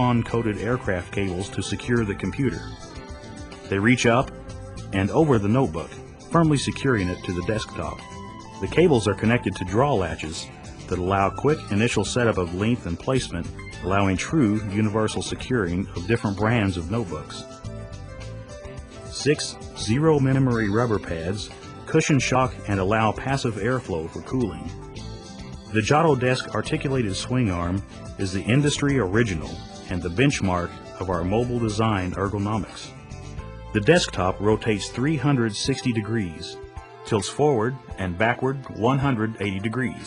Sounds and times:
Speech: 0.0s - 2.7s, 3.7s - 4.3s, 4.9s - 8.0s, 8.6s - 17.5s, 19.1s - 24.8s, 25.7s - 32.9s, 33.8s - 40.0s
Music: 0.0s - 40.0s.

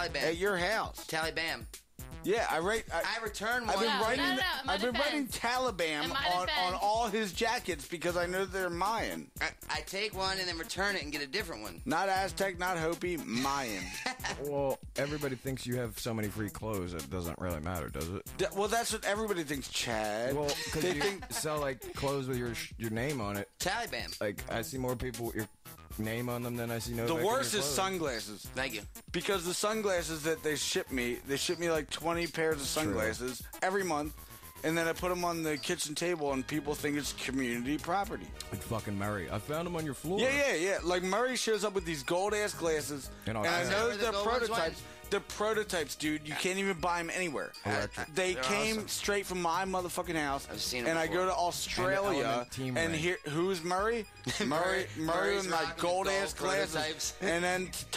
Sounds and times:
Speech: 0.0s - 1.6s, 2.3s - 57.9s
Music: 0.0s - 57.9s.

